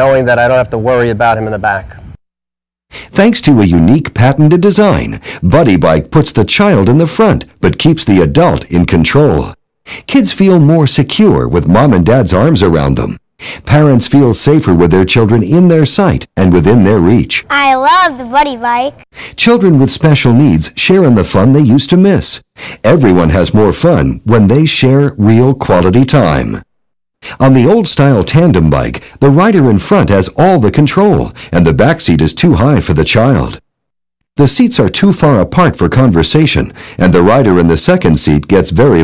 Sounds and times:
Speech: 0.0s - 2.1s, 3.1s - 26.6s, 27.4s - 33.6s, 34.4s - 39.0s.

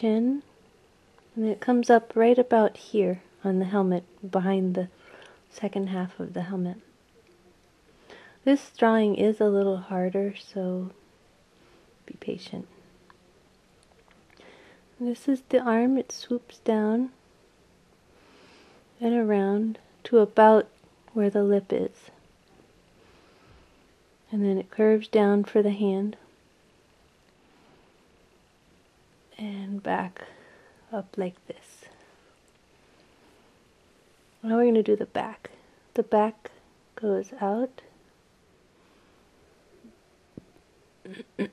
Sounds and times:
Speech: 0.0s - 0.5s, 1.4s - 4.9s, 5.5s - 6.9s, 8.4s - 11.0s, 12.1s - 12.7s, 15.0s - 17.2s, 19.0s - 22.2s, 24.3s - 26.3s, 29.4s - 30.3s, 30.9s - 31.9s, 34.4s - 37.9s.

